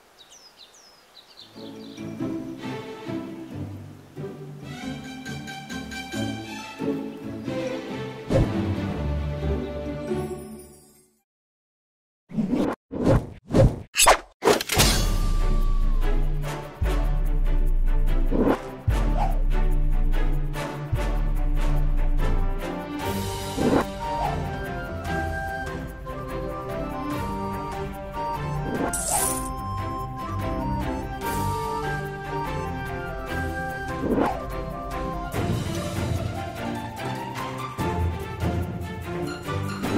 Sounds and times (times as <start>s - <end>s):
Music: 1.4s - 11.2s, 14.8s - 39.9s.